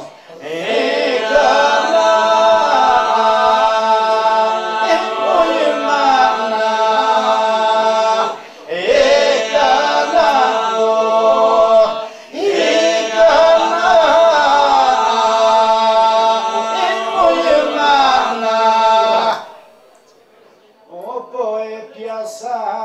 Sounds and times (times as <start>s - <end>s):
Male singing: 0.4s - 19.4s, 20.9s - 22.8s.